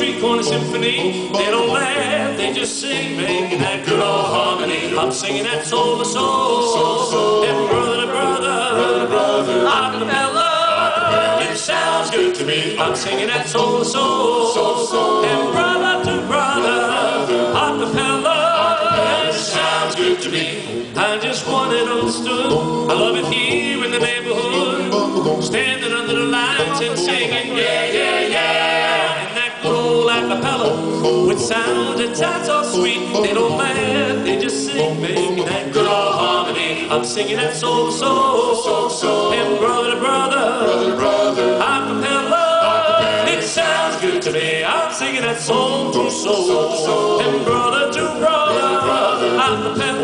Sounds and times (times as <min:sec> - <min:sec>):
Music: 0:00.0 - 0:50.0.